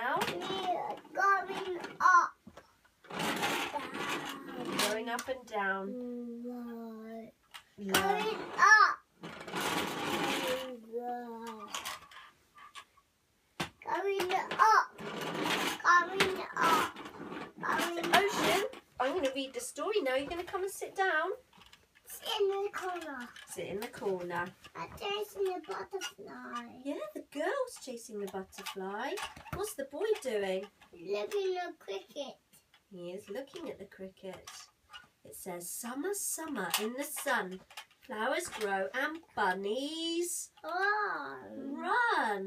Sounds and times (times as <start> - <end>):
Female speech, woman speaking: 0.0 - 0.5, 4.8 - 6.0, 17.8 - 21.4, 23.5 - 24.6, 26.8 - 30.7, 32.9 - 34.7, 35.3 - 40.6, 41.7 - 42.4
Child speech, kid speaking: 0.1 - 2.4, 3.7 - 9.1, 10.3 - 11.9, 13.8 - 15.0, 15.8 - 17.0, 17.6 - 18.7, 22.1 - 23.4, 24.8 - 27.0, 31.0 - 32.5, 40.6 - 42.4.